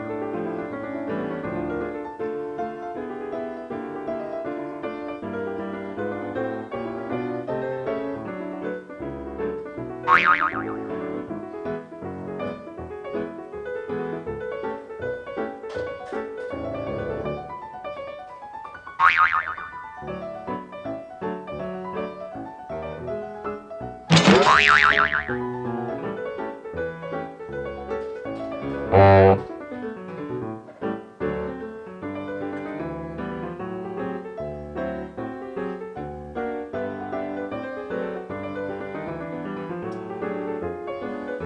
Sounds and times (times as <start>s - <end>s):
Music: 0.0s - 10.1s, 10.8s - 18.7s, 20.0s - 24.1s, 25.2s - 29.5s, 30.2s - 41.4s
Boing: 10.1s - 10.9s, 19.0s - 19.9s, 24.1s - 25.4s, 28.9s - 29.5s.